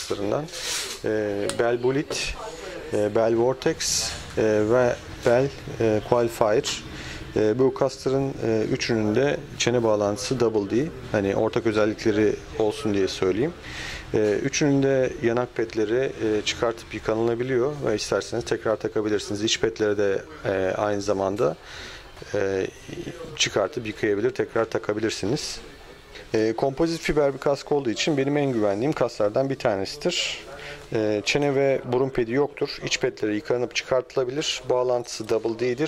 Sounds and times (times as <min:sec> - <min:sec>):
Speech: 0:00.0 - 0:21.6, 0:22.2 - 0:35.8.